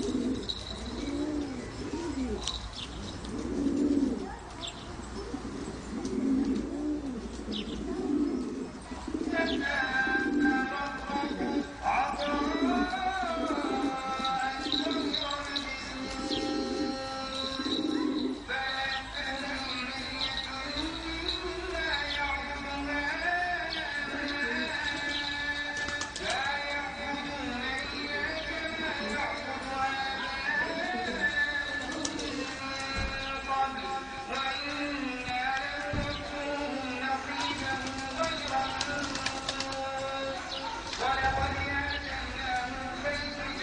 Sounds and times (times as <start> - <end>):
Pigeon, dove: 0.0 - 18.6, 22.8 - 42.0.